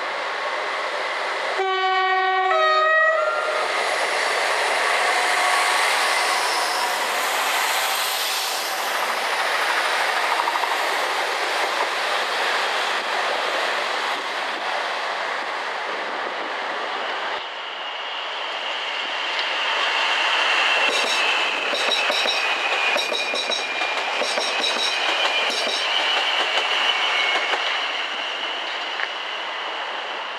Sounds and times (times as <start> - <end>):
Railroad car, train wagon: 0.0 - 30.3
Subway, metro, underground: 0.0 - 30.3
Train horn: 1.6 - 3.6, 5.0 - 7.2
Clickety-clack: 10.2 - 11.0, 20.9 - 27.8.